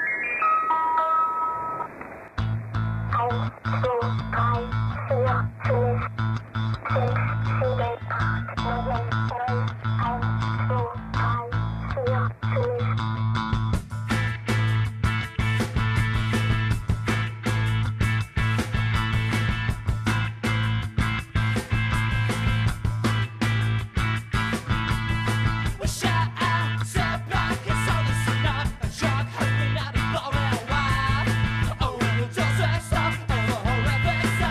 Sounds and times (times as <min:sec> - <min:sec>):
Rhythm and blues: 0:00.0 - 0:34.5
Soul music: 0:00.0 - 0:34.5.